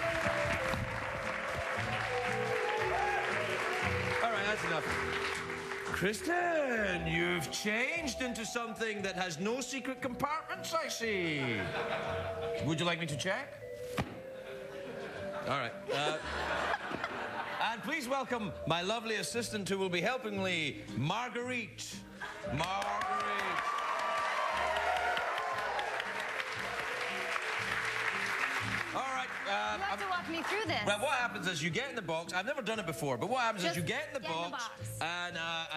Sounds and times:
Music: 0.0s - 35.7s.

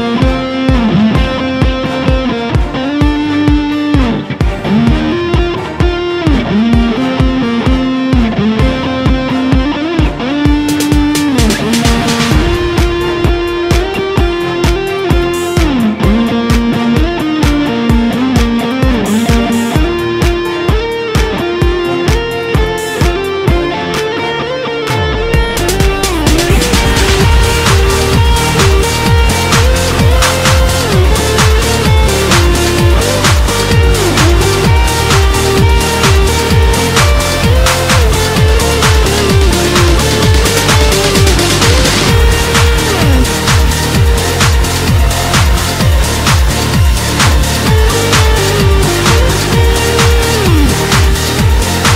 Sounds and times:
Electric guitar: 0.0s - 51.9s
Strum: 0.0s - 51.9s.

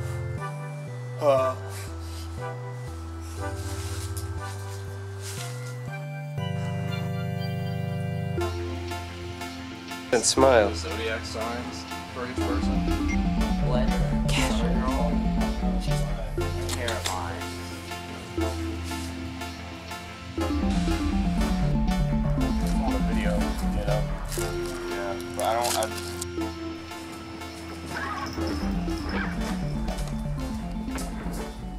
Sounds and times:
Music: 0.0s - 31.7s.

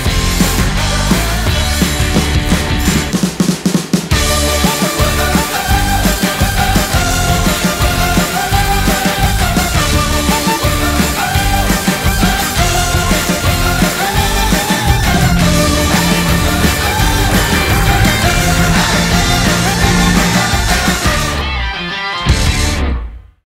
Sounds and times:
Music: 0.0s - 23.4s.

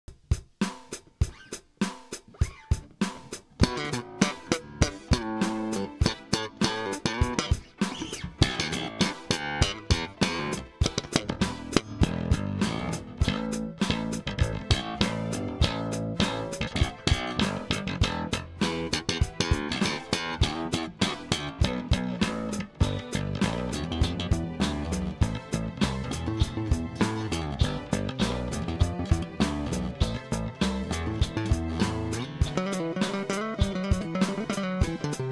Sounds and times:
Funk: 0.1s - 35.3s
Bass guitar: 2.2s - 35.3s.

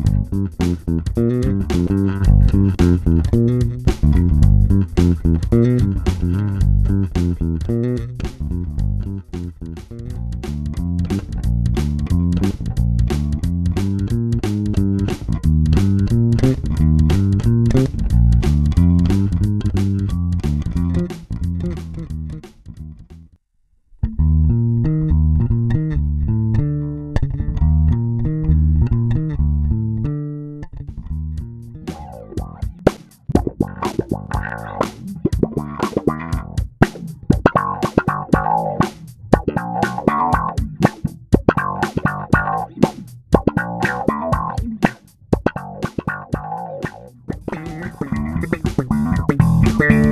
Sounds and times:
Effects unit: 0.0s - 50.1s
Electric guitar: 31.7s - 50.1s.

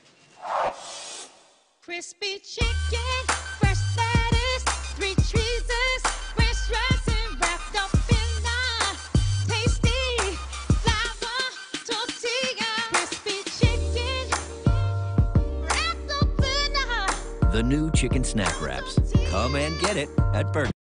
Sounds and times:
Music: 2.6s - 20.8s
Speech: 17.6s - 20.8s.

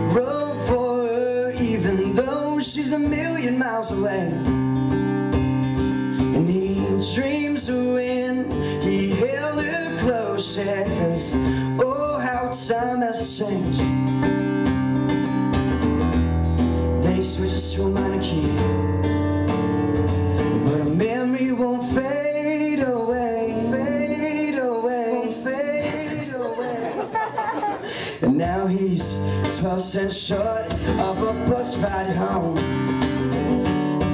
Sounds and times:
Guitar: 0.0s - 34.1s
Singing: 20.7s - 26.9s.

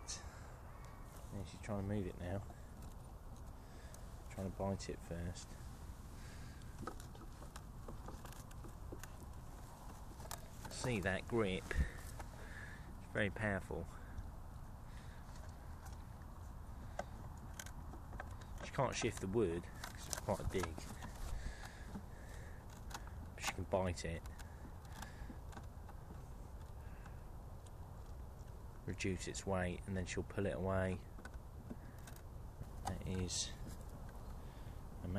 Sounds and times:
Speech: 1.3s - 2.5s, 4.3s - 5.6s, 10.7s - 12.0s, 13.0s - 14.0s, 18.6s - 20.9s, 23.4s - 24.3s, 28.8s - 31.1s, 32.9s - 33.6s.

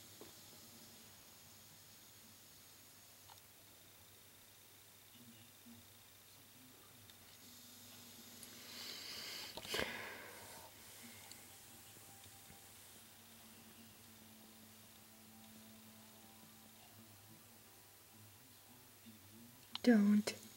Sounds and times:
Hiss: 0.0s - 3.3s, 7.4s - 11.7s.

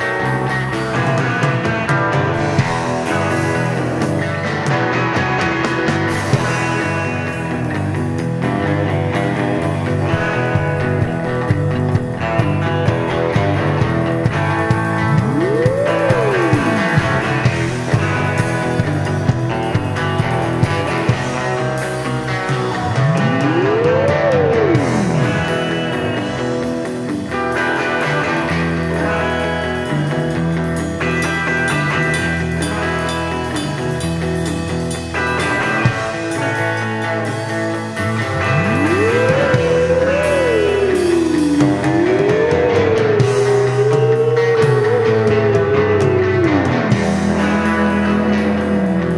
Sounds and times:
Blues: 0.0s - 49.1s
Rhythm and blues: 0.0s - 49.1s
Soundtrack music: 2.6s - 26.8s, 38.0s - 49.1s
Exciting music: 10.4s - 19.0s, 38.0s - 49.1s.

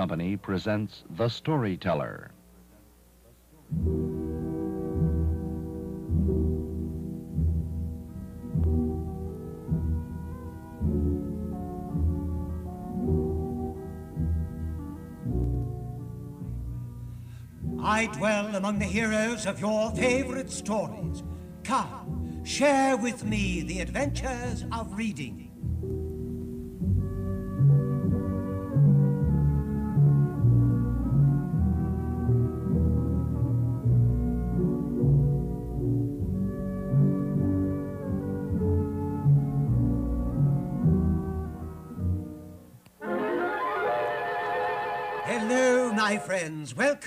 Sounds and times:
Speech: 0.0s - 3.8s, 23.1s - 25.5s, 45.3s - 47.0s
Music: 3.5s - 47.0s.

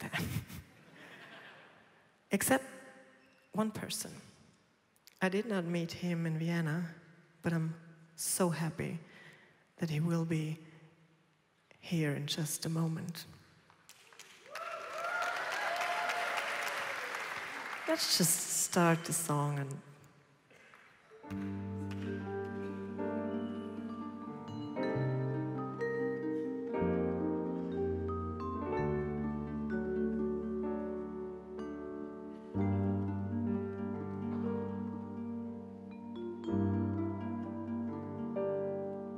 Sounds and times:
Speech: 2.3s - 2.7s, 3.6s - 4.2s, 5.2s - 9.0s, 9.8s - 10.6s, 11.8s - 13.3s, 17.9s - 19.8s
Music: 21.1s - 39.1s.

